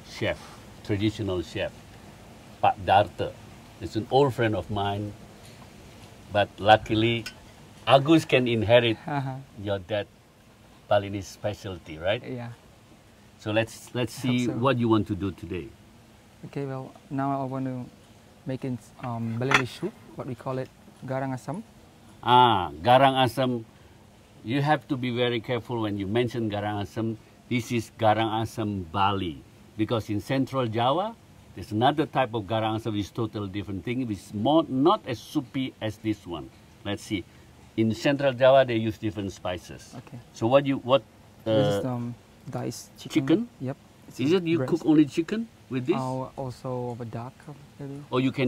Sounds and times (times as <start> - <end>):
Speech: 0.0 - 1.7, 2.6 - 5.2, 6.3 - 7.3, 13.4 - 15.7, 24.5 - 37.2, 37.8 - 48.4.